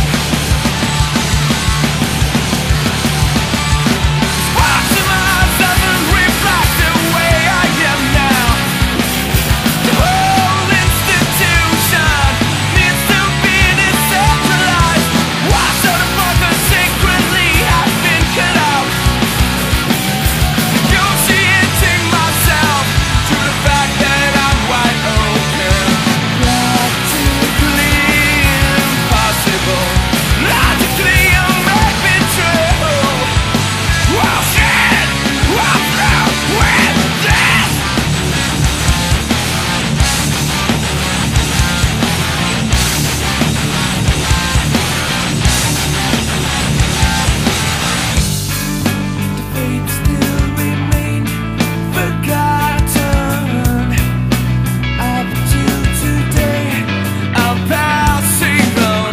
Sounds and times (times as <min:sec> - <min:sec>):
Music: 0:00.0 - 0:59.1.